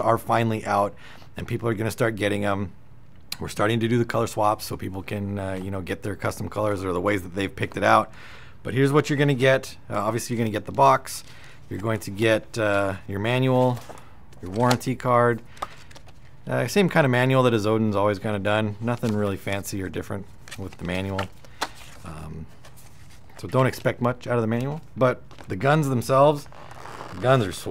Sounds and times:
Speech: 0:00.0 - 0:02.8, 0:03.4 - 0:08.1, 0:08.7 - 0:13.8, 0:14.4 - 0:15.4, 0:16.5 - 0:21.3, 0:22.0 - 0:22.5, 0:23.4 - 0:26.5, 0:27.2 - 0:27.7.

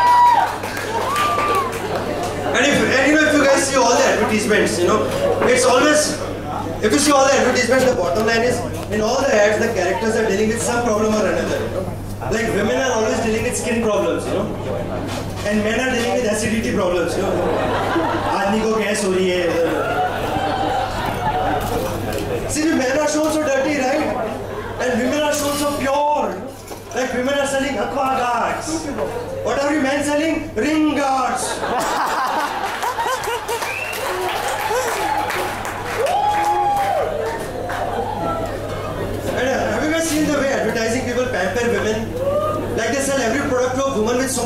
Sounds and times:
Speech: 0:02.2 - 0:17.5, 0:18.3 - 0:19.8, 0:21.8 - 0:31.6, 0:39.3 - 0:44.4.

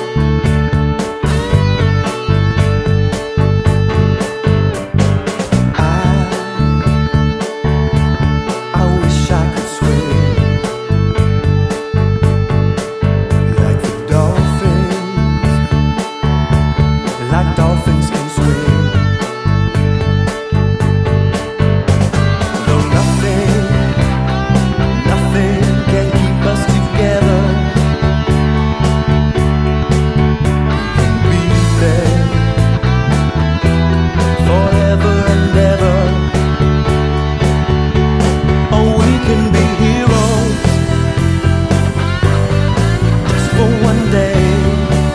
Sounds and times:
Bass guitar: 0:00.0 - 0:45.1
Electric guitar: 0:00.0 - 0:45.1.

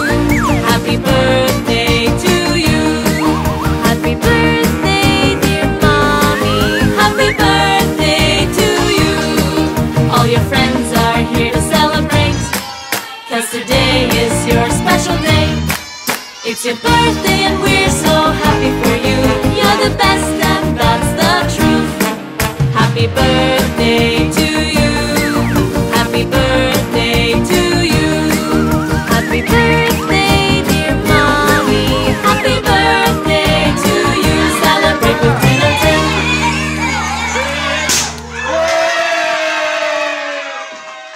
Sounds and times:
Music for children: 0:00.0 - 0:38.3.

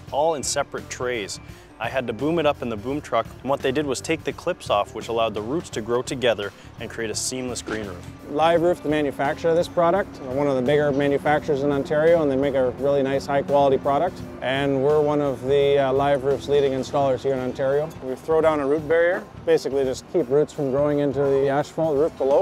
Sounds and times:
Music: 0:00.0 - 0:22.4
Speech: 0:00.0 - 0:22.4.

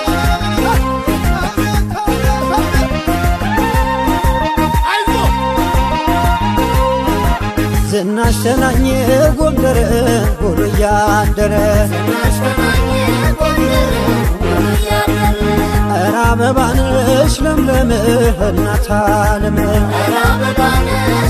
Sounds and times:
Music of Africa: 0:00.0 - 0:21.2.

